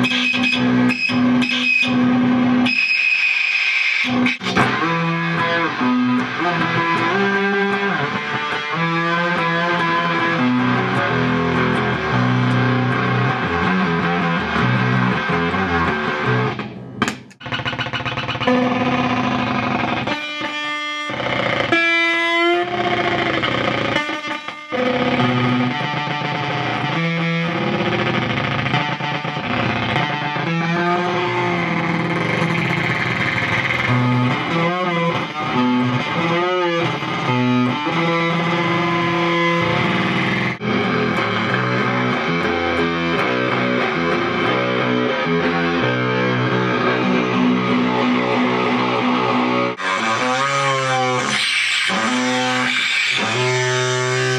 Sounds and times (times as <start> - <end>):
Bass guitar: 0.0 - 2.9, 4.1 - 54.3
Tapping (guitar technique): 0.0 - 3.0, 4.1 - 54.3
Effects unit: 0.0 - 54.3.